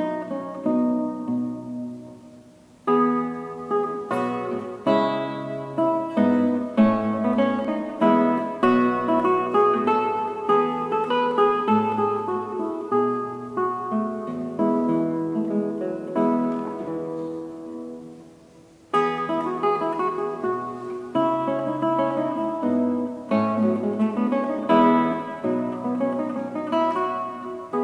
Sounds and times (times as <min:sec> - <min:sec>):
Music: 0:00.0 - 0:27.8.